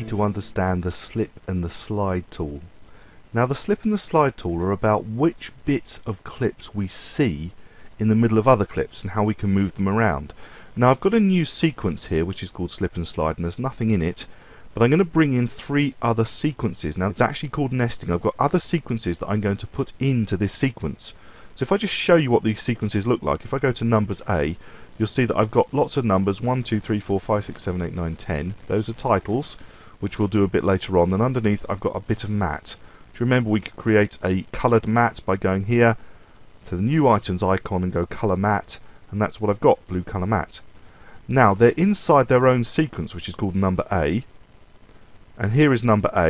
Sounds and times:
Speech: 0.0s - 36.0s, 36.6s - 40.7s, 41.3s - 44.3s, 45.4s - 46.3s.

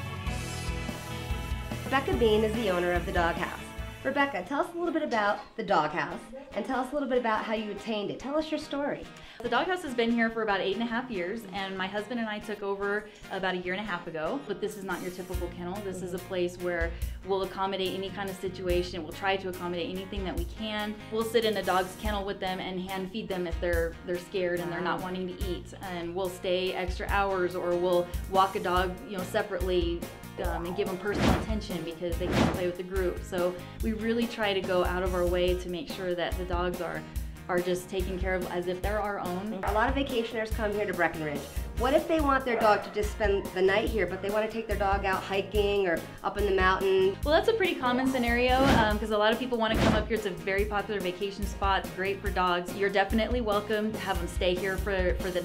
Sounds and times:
Music: 0.0s - 55.4s
Speech: 1.9s - 55.4s.

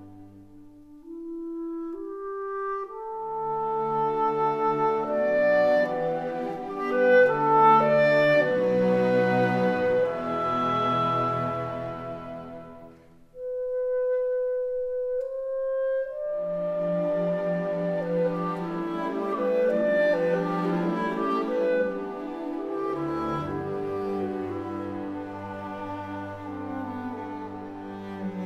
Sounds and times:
Music: 0.0s - 28.4s.

